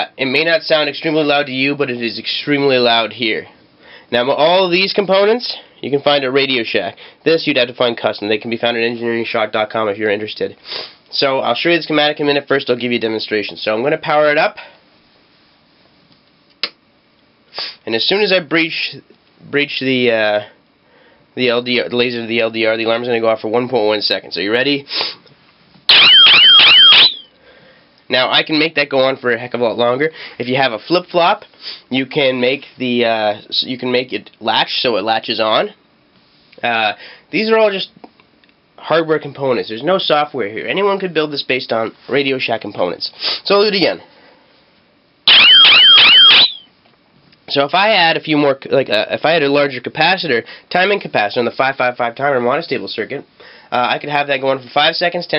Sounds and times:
Speech: 0:00.0 - 0:14.8, 0:17.8 - 0:20.6, 0:21.4 - 0:24.9, 0:28.1 - 0:35.8, 0:36.6 - 0:38.1, 0:38.8 - 0:44.1, 0:47.5 - 0:55.3
Inside, small room: 0:00.0 - 0:55.3.

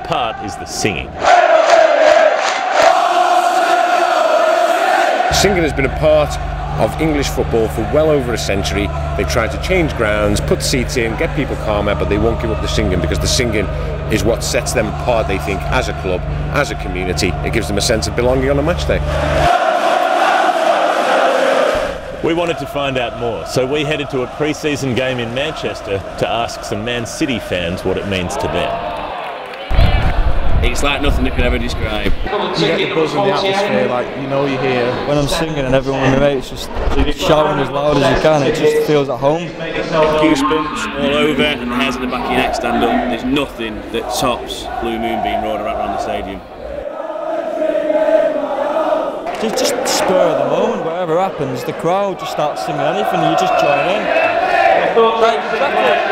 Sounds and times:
Speech: 0:00.0 - 0:01.2, 0:05.3 - 0:19.0, 0:22.2 - 0:28.8, 0:30.6 - 0:46.4, 0:49.4 - 0:54.2, 0:54.9 - 0:56.1.

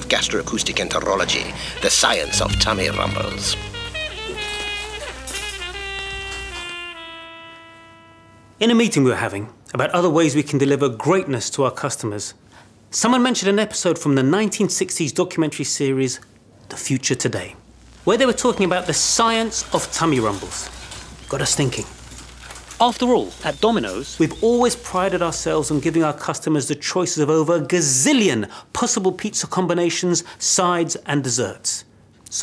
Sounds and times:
Speech: 0:00.0 - 0:03.6, 0:08.6 - 0:20.7, 0:21.3 - 0:21.9, 0:22.8 - 0:32.4.

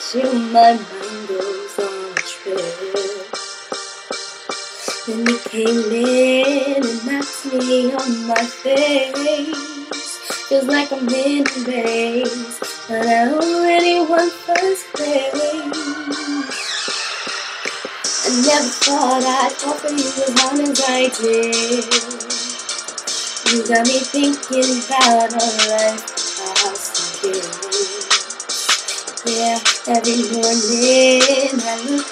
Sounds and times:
Female singing: 0:00.0 - 0:03.3, 0:05.0 - 0:16.5, 0:18.2 - 0:22.4, 0:23.4 - 0:28.1, 0:29.2 - 0:32.1
Music: 0:00.0 - 0:32.1.

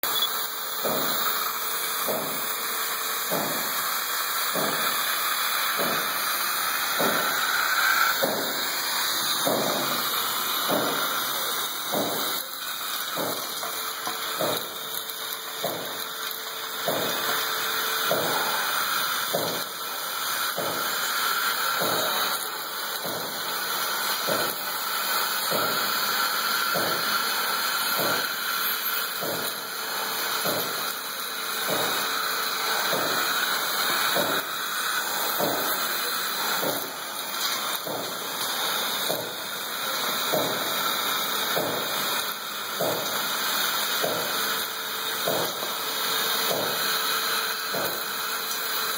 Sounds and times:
Vacuum cleaner: 0:00.0 - 0:48.9.

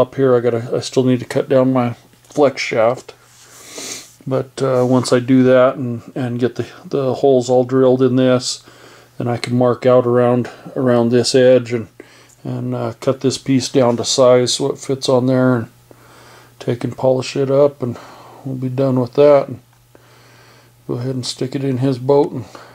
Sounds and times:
Speech: 0:00.0 - 0:03.2, 0:04.2 - 0:08.6, 0:09.2 - 0:15.8, 0:16.6 - 0:19.6, 0:20.9 - 0:22.7.

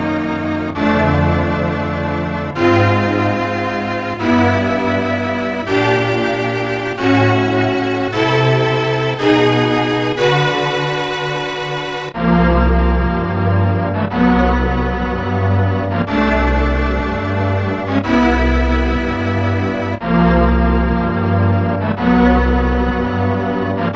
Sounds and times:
Video game music: 0:00.0 - 0:23.9.

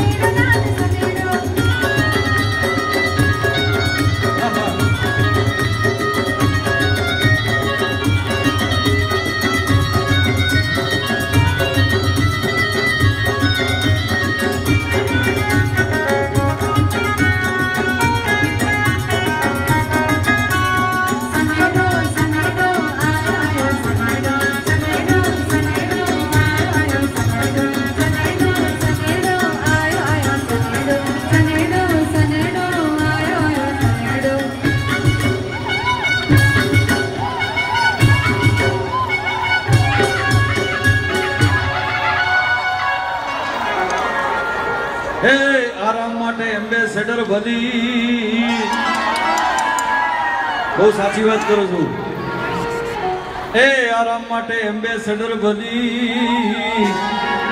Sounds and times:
Music: 0:00.0 - 0:57.5
Singing: 0:45.2 - 0:50.2, 0:53.6 - 0:57.5.

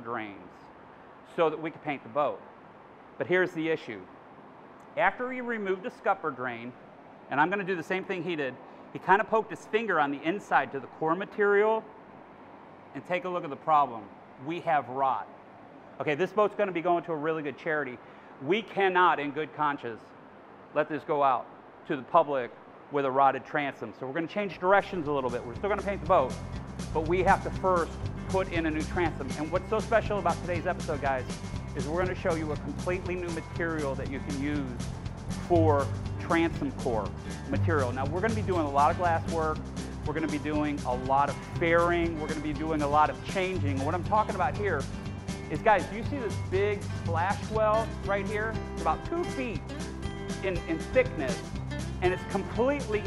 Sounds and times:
Speech: 0:00.0 - 0:00.6, 0:01.3 - 0:02.4, 0:03.2 - 0:04.1, 0:05.0 - 0:11.9, 0:13.0 - 0:15.3, 0:16.0 - 0:20.1, 0:20.8 - 0:34.8, 0:35.4 - 0:44.9, 0:45.5 - 0:49.6, 0:50.4 - 0:51.4, 0:52.0 - 0:53.0.

